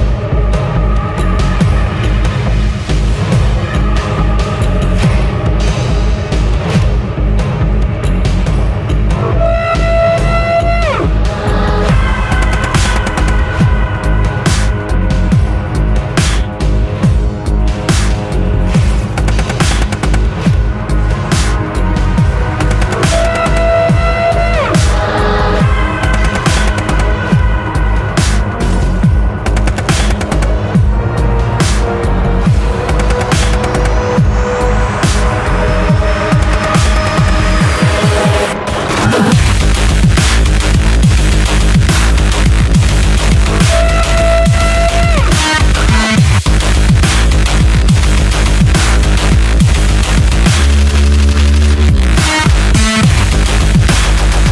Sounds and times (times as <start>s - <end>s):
Dubstep: 0.0s - 54.5s.